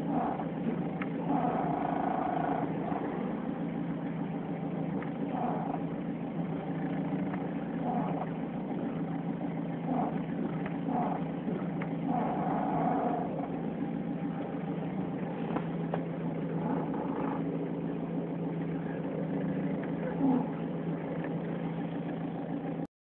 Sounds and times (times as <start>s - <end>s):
Mechanisms: 0.0s - 22.9s.